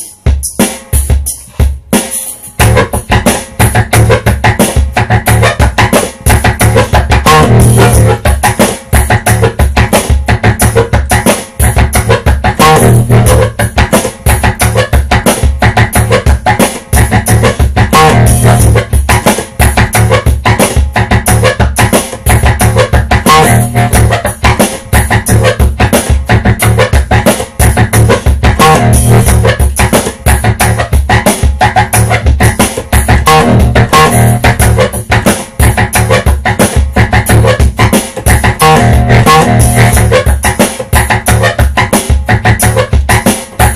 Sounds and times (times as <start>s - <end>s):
Music: 0.0s - 43.7s.